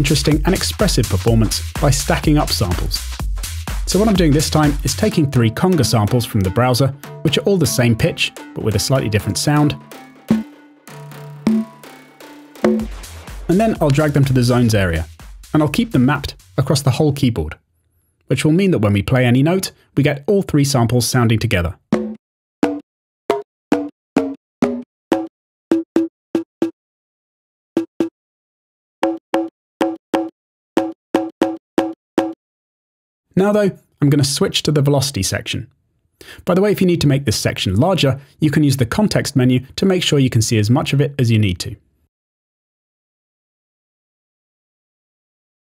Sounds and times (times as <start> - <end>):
Speech: 0.0 - 3.1, 3.9 - 9.8, 13.5 - 17.6, 18.3 - 21.8, 33.4 - 35.7, 36.4 - 41.8.